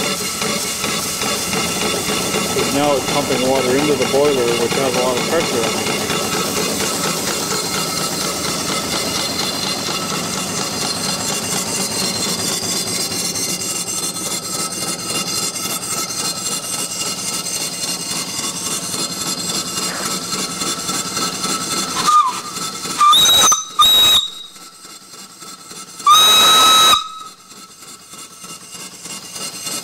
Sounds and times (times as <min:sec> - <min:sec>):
Hiss: 0:19.4 - 0:24.3
Steam whistle: 0:21.9 - 0:24.9, 0:26.0 - 0:27.8.